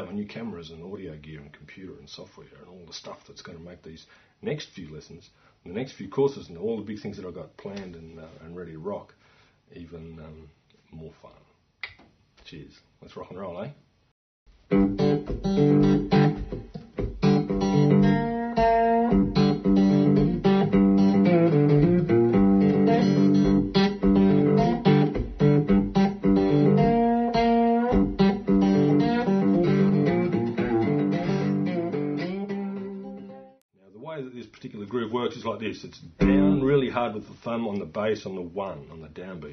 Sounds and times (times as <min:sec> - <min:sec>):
Guitar: 0:14.7 - 0:33.6, 0:36.2 - 0:37.0.